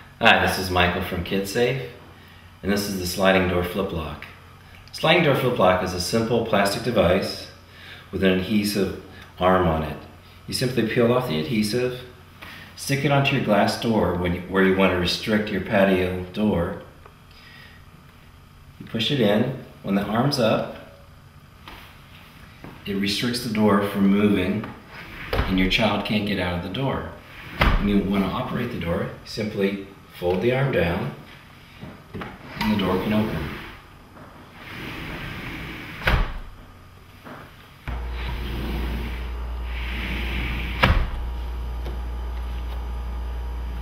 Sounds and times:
Speech: 0:00.2 - 0:02.0, 0:02.6 - 0:12.2, 0:12.8 - 0:16.9, 0:18.8 - 0:21.0, 0:22.8 - 0:24.8, 0:25.4 - 0:31.3, 0:32.6 - 0:33.7
Sliding door: 0:24.9 - 0:25.8, 0:27.3 - 0:28.3, 0:34.5 - 0:36.6, 0:37.9 - 0:41.3.

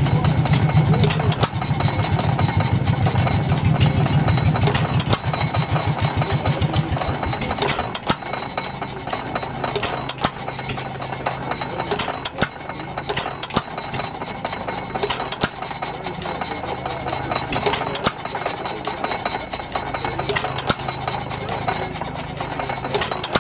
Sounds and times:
Speech: 0:00.0 - 0:03.2, 0:05.6 - 0:08.1, 0:10.8 - 0:13.8, 0:14.6 - 0:23.4
Idling: 0:00.0 - 0:23.4
Medium engine (mid frequency): 0:00.0 - 0:23.4.

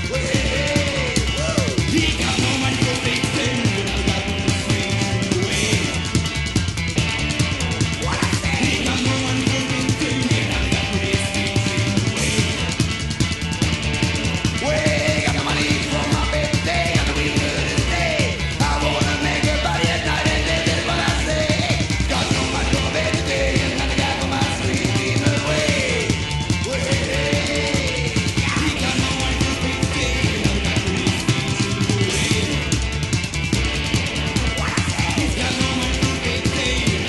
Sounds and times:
Music: 0:00.0 - 0:37.0.

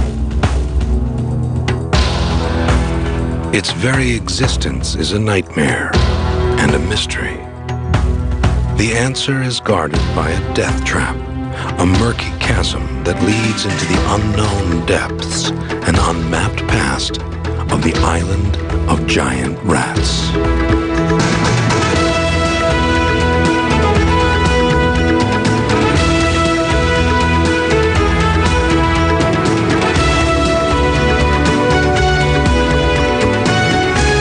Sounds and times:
Music: 0:00.0 - 0:34.2.

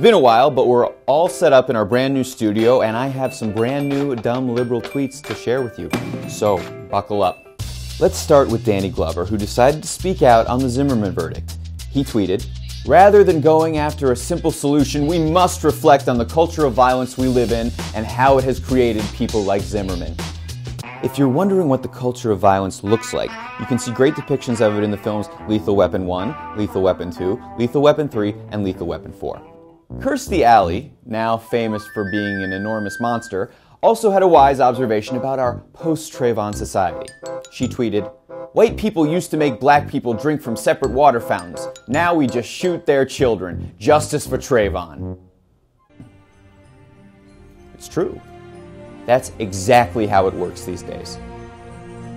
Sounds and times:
Speech: 0:00.0 - 0:07.4, 0:08.0 - 0:20.2, 0:21.0 - 0:45.0, 0:47.8 - 0:48.2, 0:49.1 - 0:51.2
Music: 0:00.0 - 0:52.1.

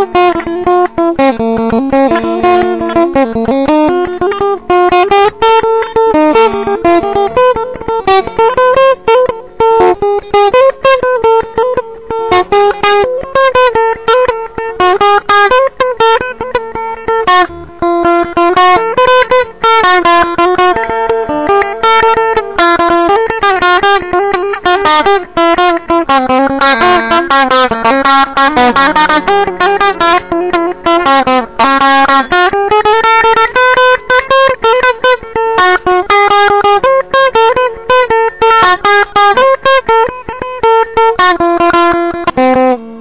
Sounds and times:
Guitar: 0:00.0 - 0:43.0.

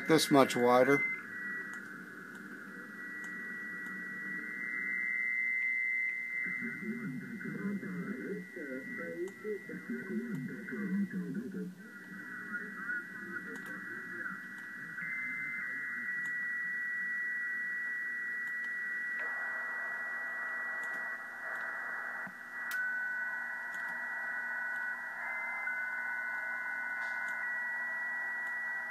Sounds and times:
Speech: 0:00.0 - 0:01.0.

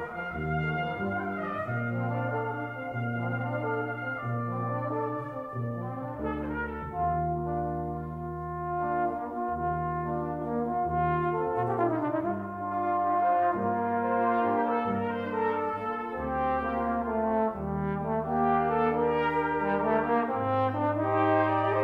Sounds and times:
Trombone: 0:00.0 - 0:21.8.

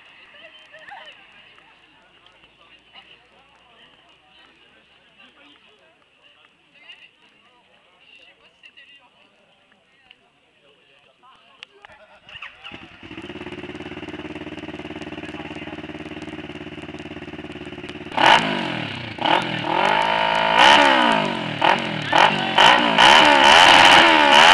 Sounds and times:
Speech: 0:00.4 - 0:12.8, 0:15.0 - 0:16.0.

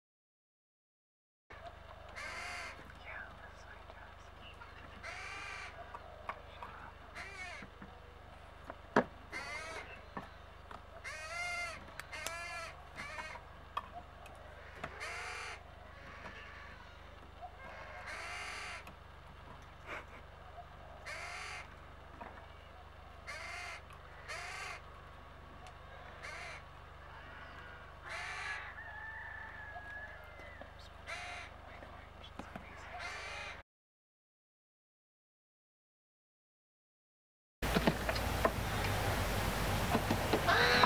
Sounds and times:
Caw: 0:02.1 - 0:02.9, 0:05.0 - 0:05.9, 0:07.1 - 0:07.7, 0:09.3 - 0:10.0, 0:11.0 - 0:13.4, 0:14.5 - 0:18.9, 0:21.0 - 0:21.7, 0:23.3 - 0:24.8, 0:25.9 - 0:31.6, 0:32.8 - 0:33.6, 0:40.4 - 0:40.8.

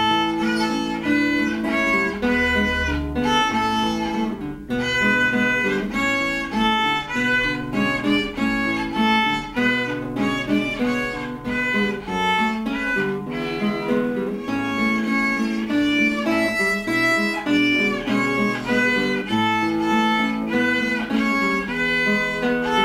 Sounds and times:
Violin, fiddle: 0:00.0 - 0:22.8.

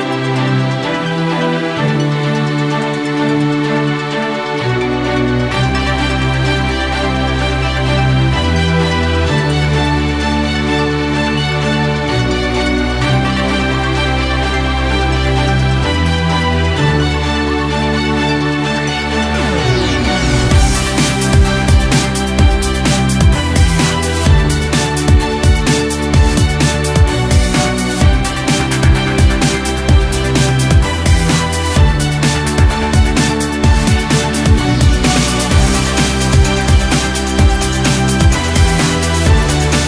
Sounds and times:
Theme music: 0:00.0 - 0:39.8.

